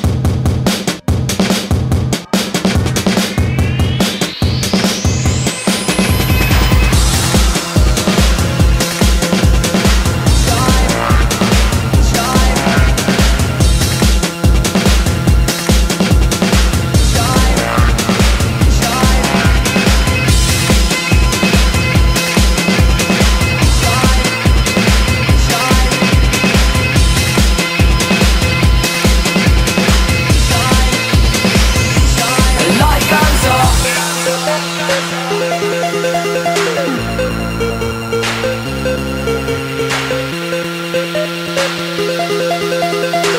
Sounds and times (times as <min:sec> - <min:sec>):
Music: 0:00.0 - 0:43.3.